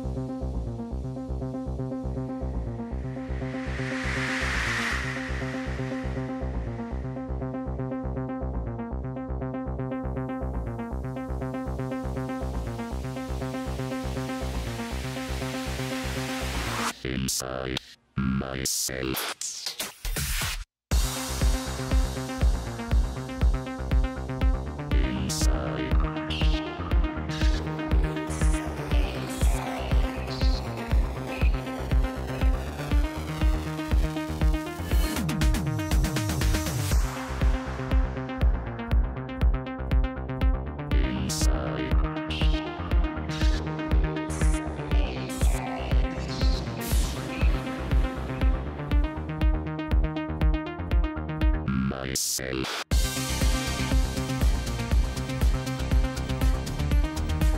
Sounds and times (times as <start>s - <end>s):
Music: 0.0s - 57.5s.